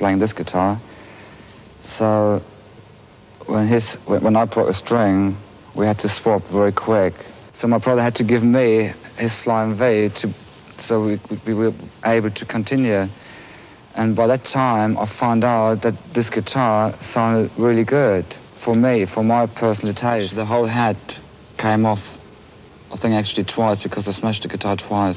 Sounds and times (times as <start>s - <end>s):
Speech: 0.0s - 0.9s, 1.8s - 2.5s, 3.4s - 13.2s, 13.9s - 22.2s, 22.9s - 25.1s.